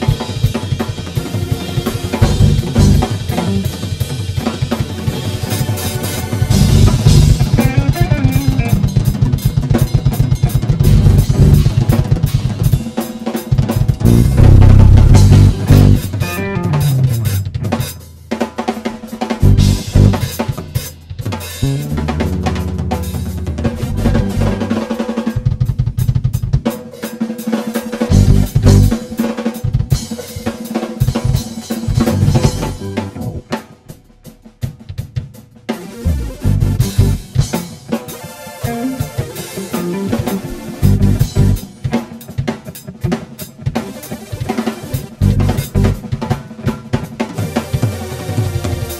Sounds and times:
Drum kit: 0:00.0 - 0:48.9
Drum roll: 0:00.0 - 0:48.9
Bass drum: 0:02.2 - 0:03.9, 0:06.5 - 0:12.9, 0:13.8 - 0:26.6, 0:28.1 - 0:30.0, 0:31.2 - 0:33.6, 0:36.0 - 0:37.7, 0:40.0 - 0:41.9, 0:45.0 - 0:46.3.

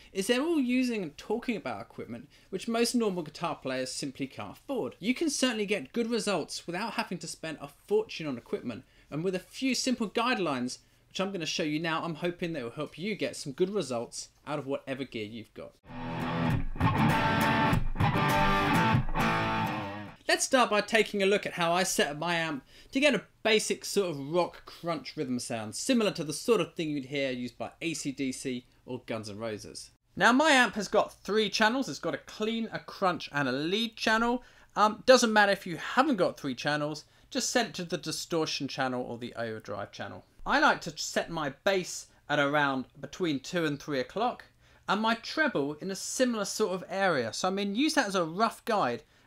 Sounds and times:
Speech: 0:00.1 - 0:15.8, 0:20.2 - 0:49.1.

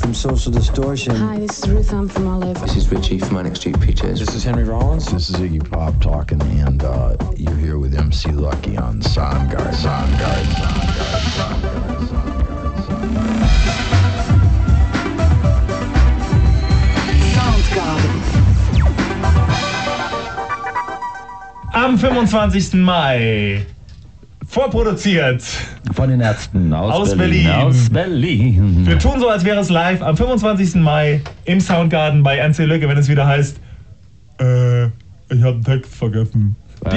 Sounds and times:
Speech: 0:00.0 - 0:11.6, 0:24.4 - 0:33.6, 0:34.4 - 0:36.9
Music: 0:00.0 - 0:23.0.

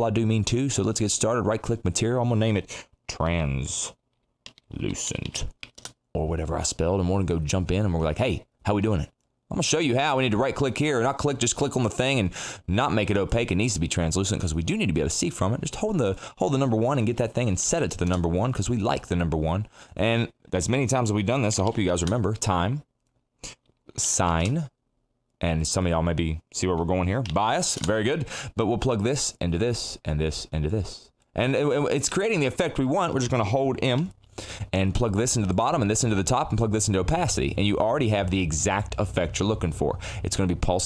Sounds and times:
Speech: 0:00.0 - 0:04.0, 0:04.7 - 0:05.5, 0:06.1 - 0:22.9, 0:23.9 - 0:24.8, 0:25.4 - 0:40.8.

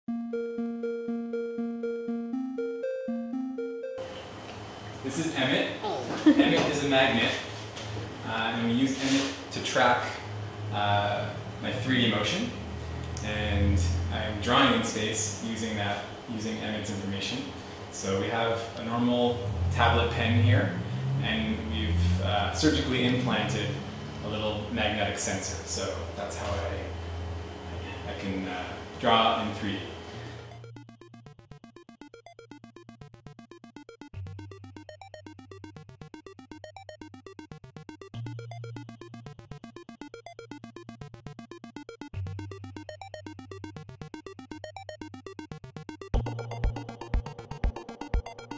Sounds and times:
Music: 0:00.1 - 0:04.2, 0:30.3 - 0:48.5.

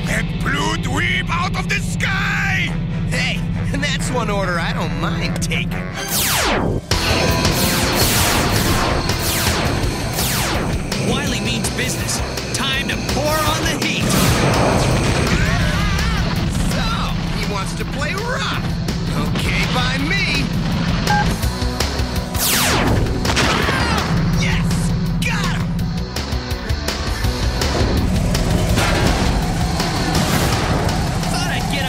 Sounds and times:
Speech: 0:00.0 - 0:05.8, 0:11.0 - 0:14.2, 0:15.3 - 0:20.5, 0:23.7 - 0:25.7, 0:31.3 - 0:31.8
Music: 0:00.0 - 0:31.8.

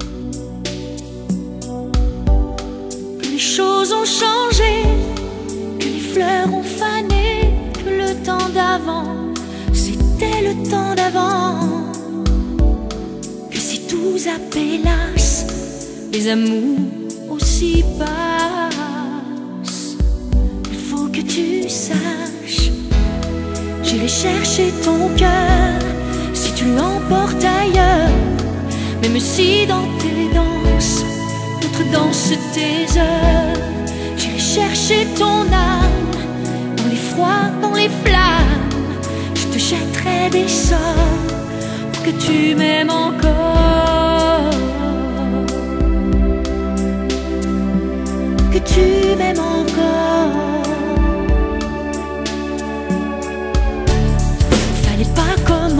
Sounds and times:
Music: 0:00.0 - 0:55.7.

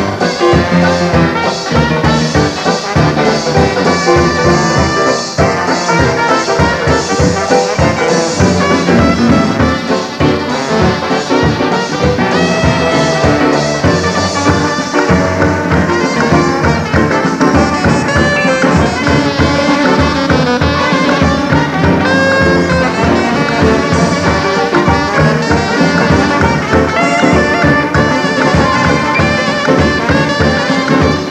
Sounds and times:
Clarinet: 0:00.0 - 0:31.3
Jazz: 0:00.0 - 0:31.3.

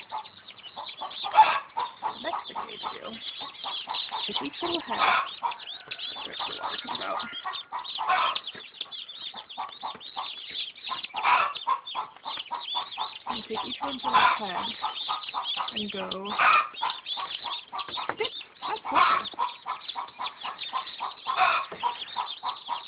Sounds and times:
Bird: 0:00.0 - 0:22.8.

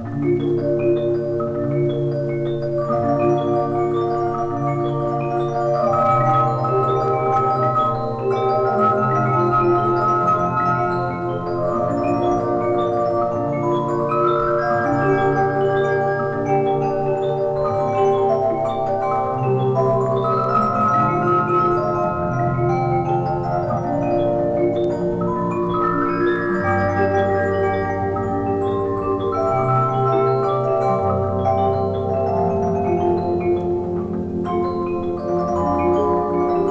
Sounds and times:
Electronic organ: 0:00.0 - 0:36.7.

